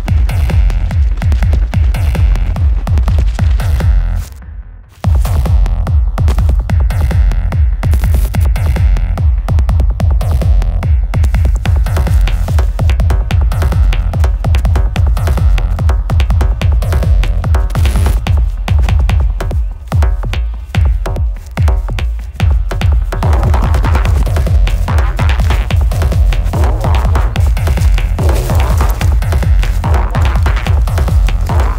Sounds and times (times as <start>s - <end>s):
Music: 0.0s - 31.7s
Outside, rural or natural: 0.0s - 31.7s.